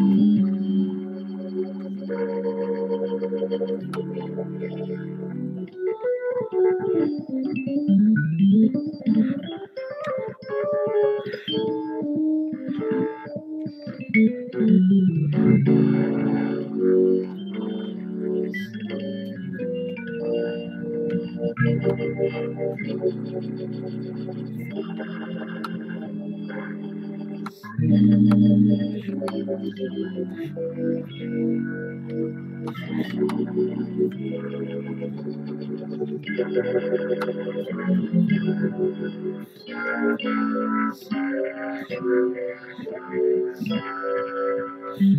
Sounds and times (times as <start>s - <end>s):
Electric guitar: 0.0s - 45.1s.